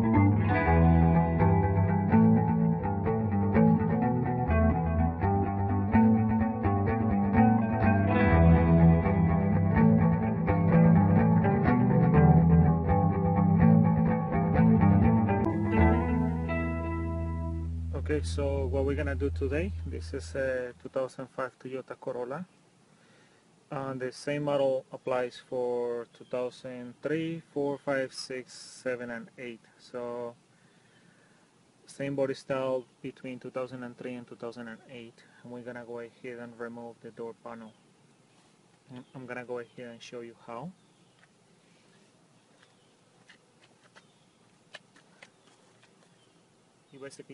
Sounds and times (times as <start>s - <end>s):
Music: 0.0s - 20.6s
Speech: 17.9s - 22.5s, 23.7s - 30.4s, 31.9s - 37.8s, 38.9s - 40.8s, 47.0s - 47.3s.